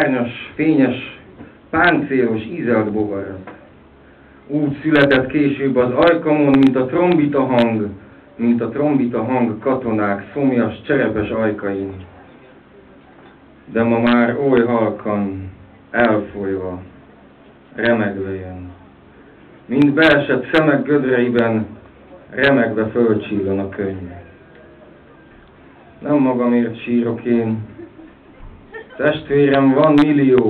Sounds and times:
Speech: 0.0s - 3.7s, 4.5s - 19.0s, 19.7s - 25.0s, 25.8s - 27.8s, 29.0s - 30.4s.

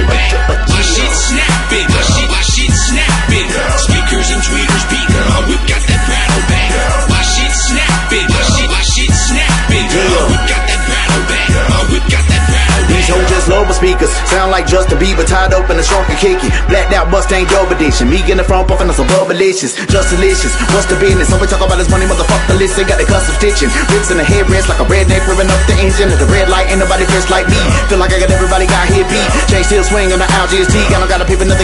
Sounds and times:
Hip hop music: 0.0s - 31.6s.

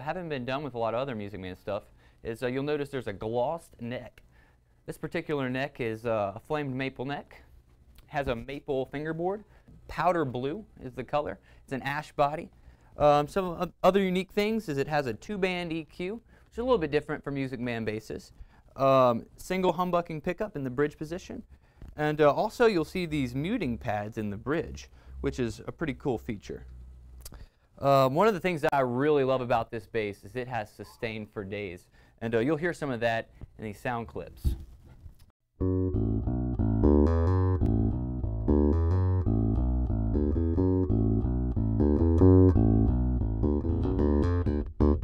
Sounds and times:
Speech: 0.0s - 4.2s, 4.9s - 26.7s, 27.8s - 34.6s.

